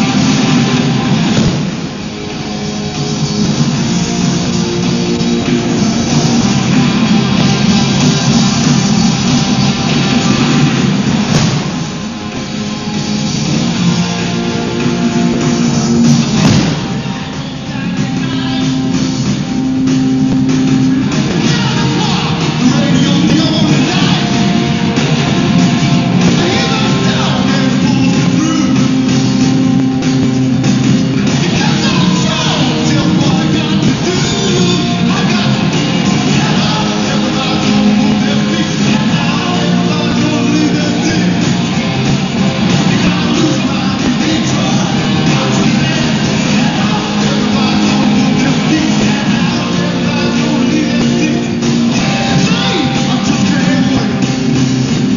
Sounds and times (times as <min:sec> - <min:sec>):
Rock and roll: 0:00.0 - 0:55.1.